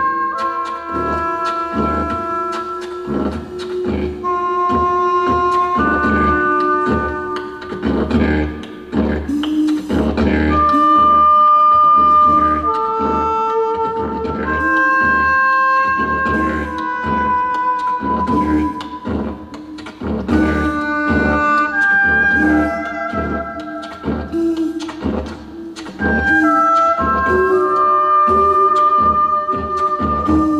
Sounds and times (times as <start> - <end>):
Didgeridoo: 0.0 - 30.5.